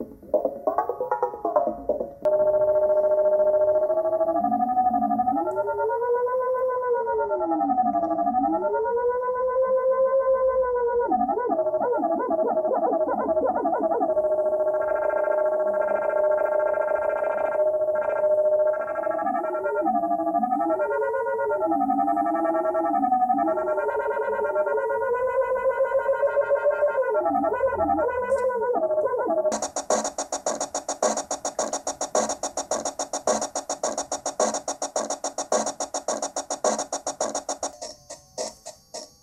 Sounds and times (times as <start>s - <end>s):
Inside, small room: 0.0s - 39.2s.